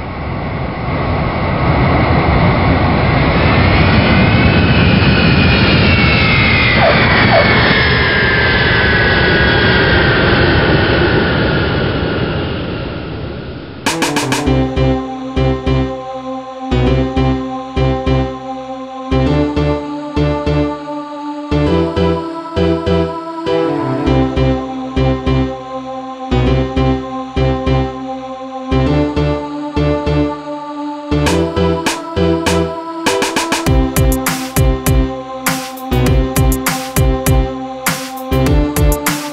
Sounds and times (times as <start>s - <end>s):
Fixed-wing aircraft, airplane: 0.0s - 14.1s
Music: 13.9s - 39.3s.